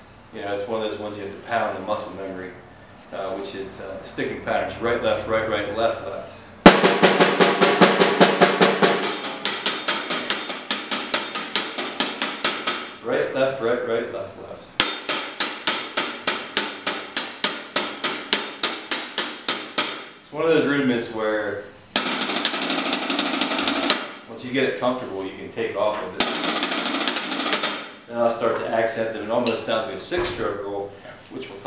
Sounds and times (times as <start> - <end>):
Speech: 0.3 - 6.5, 13.0 - 14.7, 20.3 - 21.8, 24.3 - 26.2, 28.1 - 31.6
Drum roll: 6.7 - 13.0, 14.8 - 20.1, 22.0 - 24.3, 26.2 - 28.1.